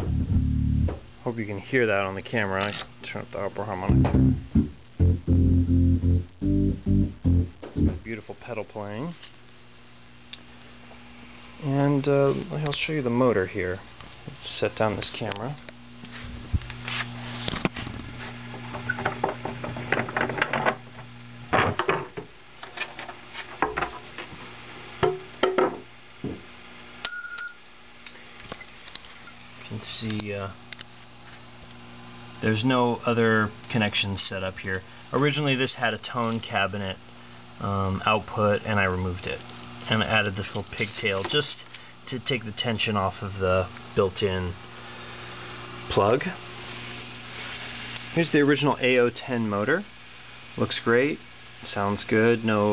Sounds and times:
Speech: 1.2s - 4.0s, 7.8s - 9.3s, 11.6s - 15.6s, 29.6s - 30.6s, 32.4s - 37.0s, 37.6s - 44.6s, 45.9s - 46.4s, 48.1s - 49.9s, 50.6s - 52.7s.

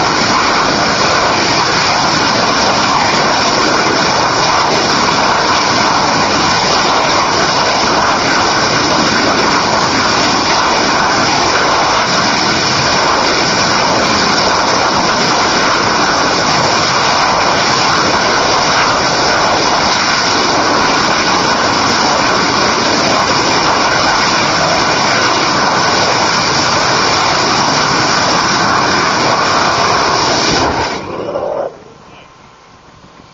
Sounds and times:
Outside, rural or natural: 0.0s - 33.3s.

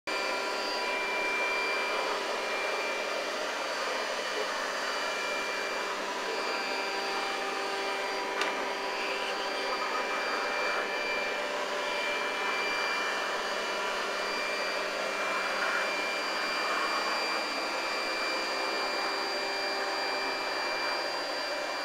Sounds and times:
Inside, small room: 0.1s - 21.8s.

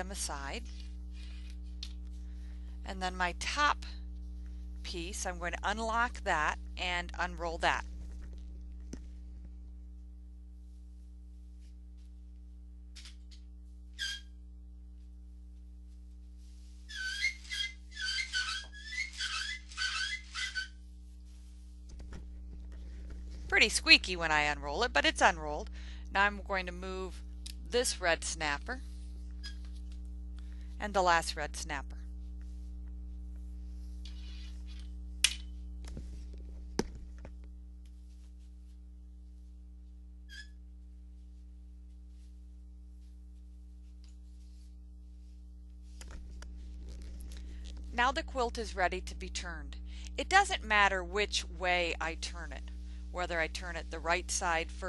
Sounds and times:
Inside, small room: 0.0s - 54.8s.

